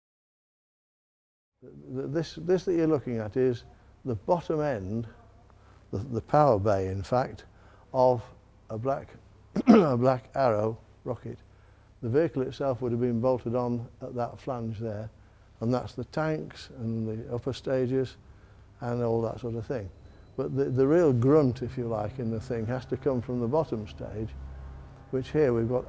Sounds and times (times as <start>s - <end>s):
Speech: 1.6s - 11.4s, 12.0s - 18.2s, 18.8s - 24.4s, 25.1s - 25.8s.